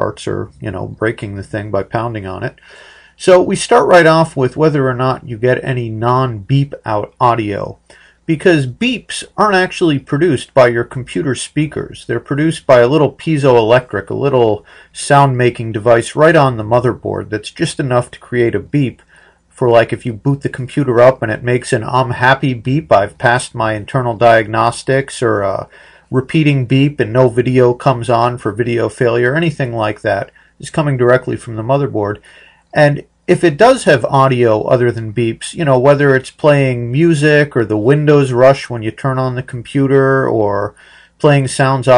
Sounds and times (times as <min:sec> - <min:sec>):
Speech: 0:00.0 - 0:02.6, 0:03.2 - 0:41.9.